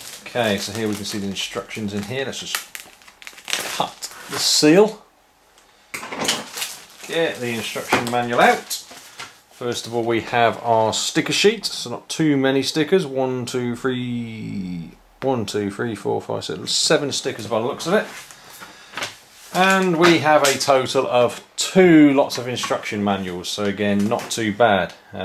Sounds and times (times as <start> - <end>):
Inside, small room: 0.0 - 25.2
Speech: 0.2 - 2.7, 3.7 - 5.1, 7.0 - 8.9, 9.6 - 18.2, 19.5 - 25.2.